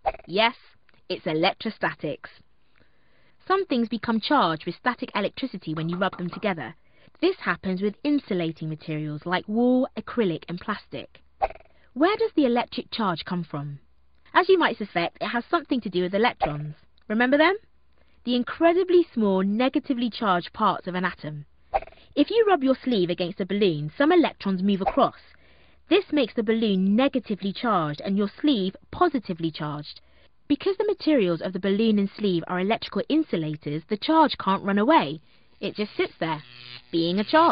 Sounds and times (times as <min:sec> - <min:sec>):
Speech: 0:00.3 - 0:02.4, 0:03.4 - 0:11.2, 0:12.0 - 0:17.6, 0:18.2 - 0:21.5, 0:22.2 - 0:25.3, 0:25.9 - 0:37.5.